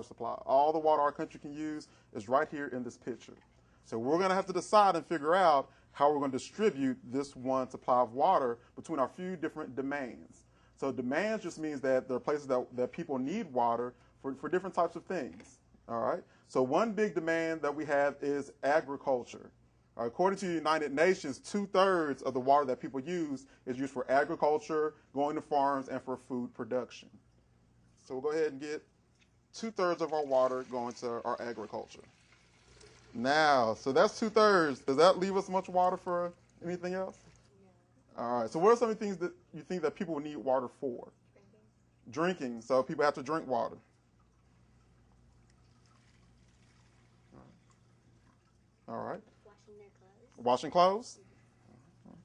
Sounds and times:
Speech: 0.0 - 27.1, 28.1 - 28.9, 29.6 - 32.1, 33.2 - 37.2, 38.2 - 41.1, 42.1 - 43.8, 48.9 - 49.8, 50.4 - 51.2.

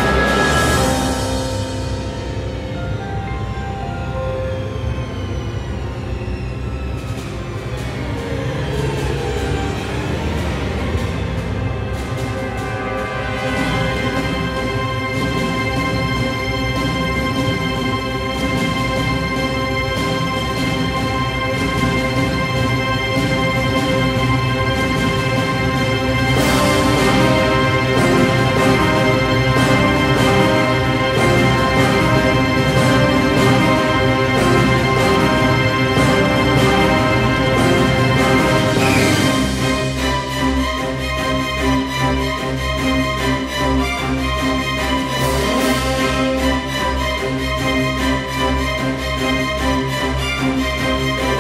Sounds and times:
Music: 0.0 - 51.4.

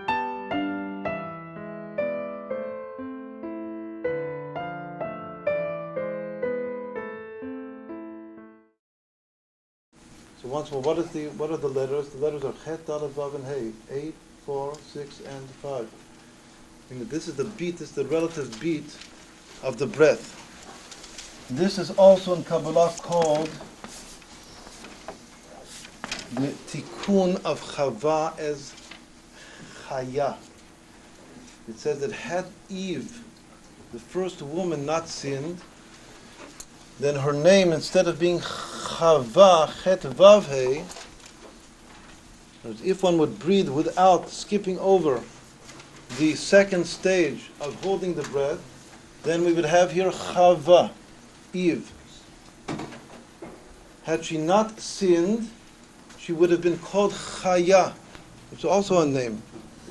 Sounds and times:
Speech: 10.4 - 16.0, 16.9 - 20.4, 21.5 - 23.6, 26.3 - 28.8, 29.9 - 30.5, 31.7 - 33.3, 34.0 - 35.7, 37.0 - 41.0, 42.6 - 45.3, 46.1 - 52.0, 54.1 - 55.6, 56.2 - 59.5.

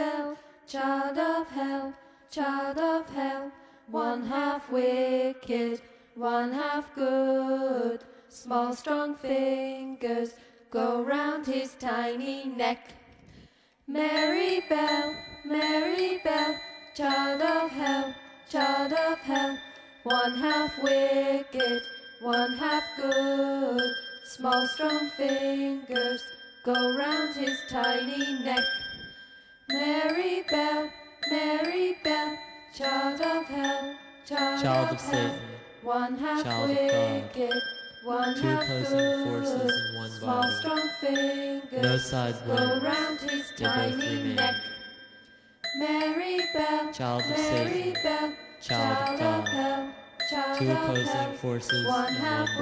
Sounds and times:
Music: 14.0 - 52.6
Speech: 34.6 - 35.6, 36.4 - 37.5, 38.3 - 40.7, 41.8 - 42.9, 43.6 - 44.6, 47.0 - 47.9, 48.7 - 49.6, 50.6 - 52.6.

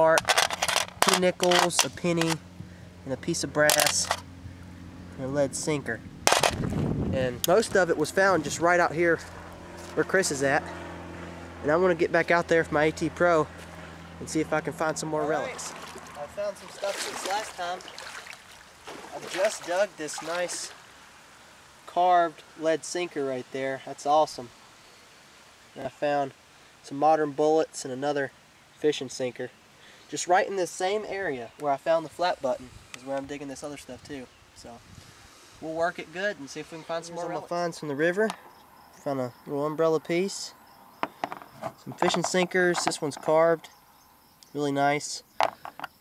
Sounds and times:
Outside, rural or natural: 0.0 - 46.0
Speech: 1.0 - 2.4, 3.1 - 4.1, 5.2 - 6.0, 7.1 - 9.3, 9.9 - 10.7, 11.6 - 13.5, 14.2 - 17.9, 19.1 - 20.8, 21.9 - 24.5, 25.8 - 29.5, 30.1 - 34.8, 35.6 - 38.4, 39.0 - 40.6, 41.7 - 43.7, 44.5 - 45.2.

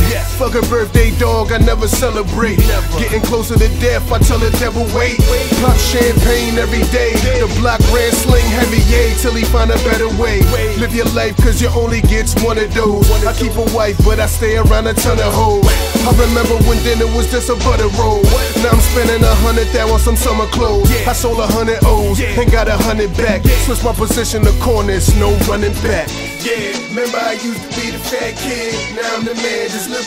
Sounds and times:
Music: 0.0 - 30.0.

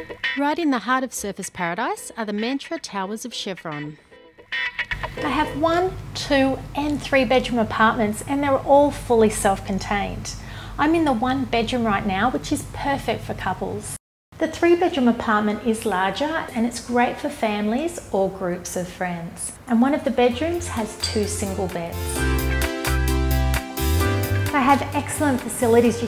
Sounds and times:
Music: 0.0 - 9.6, 20.2 - 26.0
Speech: 0.4 - 4.0, 5.2 - 22.1, 24.5 - 26.0.

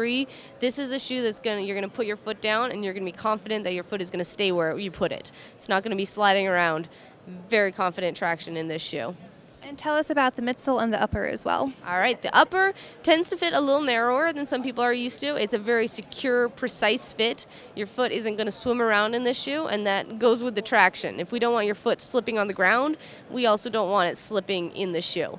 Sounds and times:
Speech: 0.0 - 25.3.

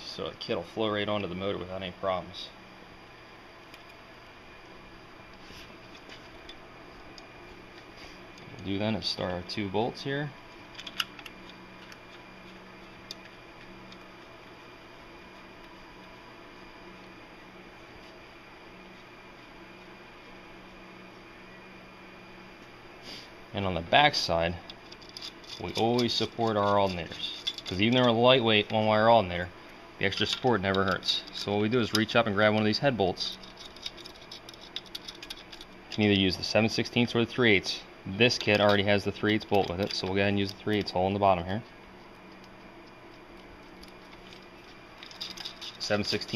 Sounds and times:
Speech: 0.0 - 2.6, 8.5 - 10.4, 23.6 - 24.6, 25.6 - 33.4, 36.0 - 41.7, 45.8 - 46.3.

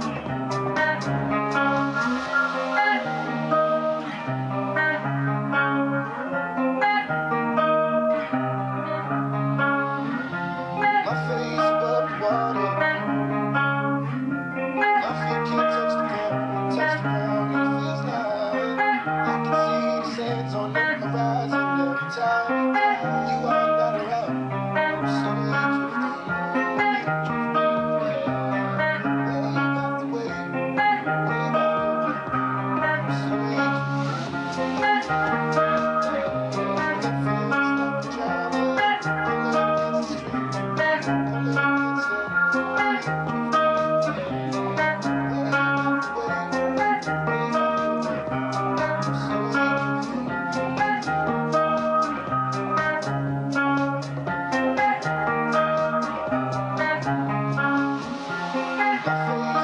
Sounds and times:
Strum: 0.0 - 59.6.

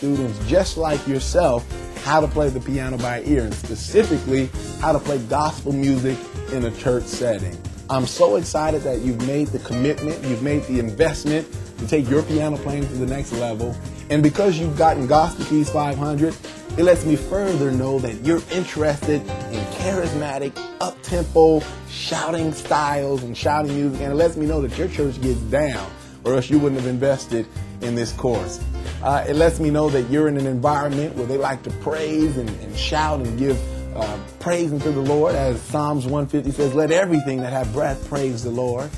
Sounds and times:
Gospel music: 0.0 - 38.9
Speech: 0.0 - 38.9.

